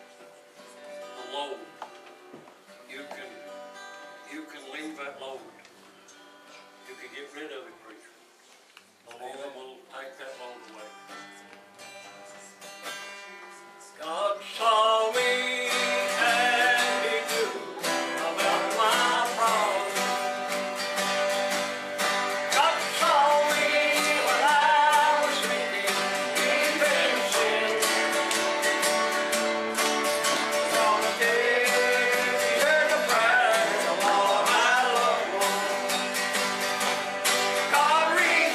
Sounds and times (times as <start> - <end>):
Music: 0.0 - 7.3, 10.2 - 38.5
Male singing: 14.0 - 20.3, 22.5 - 28.2, 30.5 - 36.0, 37.6 - 38.5.